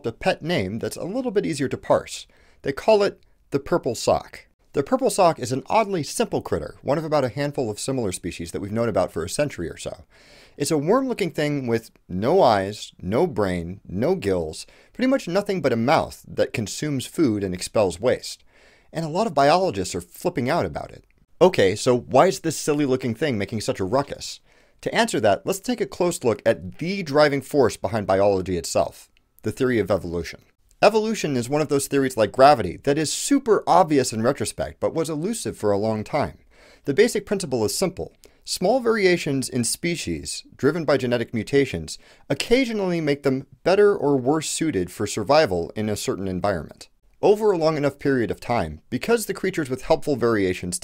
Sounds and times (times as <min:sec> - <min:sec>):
Speech: 0:00.0 - 0:50.8.